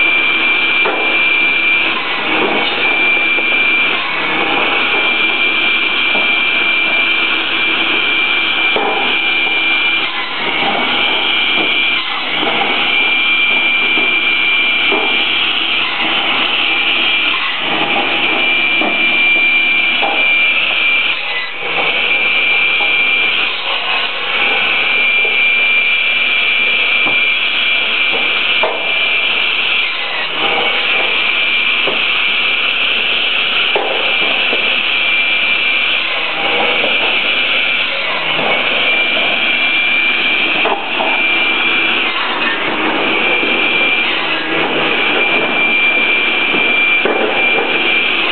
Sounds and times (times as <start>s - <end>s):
Wood: 26.7s - 29.2s, 32.9s - 48.3s.